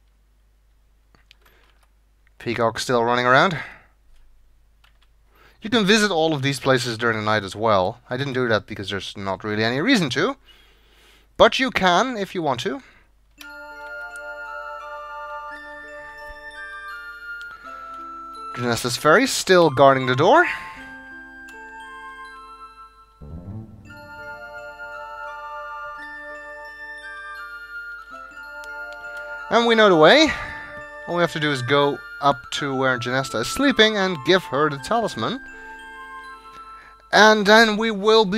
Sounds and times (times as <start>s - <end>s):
Speech: 2.4s - 3.8s, 5.6s - 10.4s, 11.4s - 12.9s, 18.6s - 20.6s, 29.5s - 30.4s, 31.1s - 35.4s, 37.2s - 38.3s
Music: 13.4s - 37.4s.